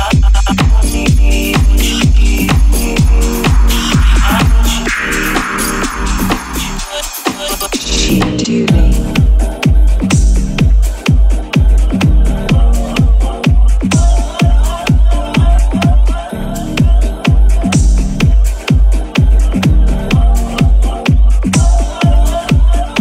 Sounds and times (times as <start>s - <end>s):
Music: 0.0s - 23.0s.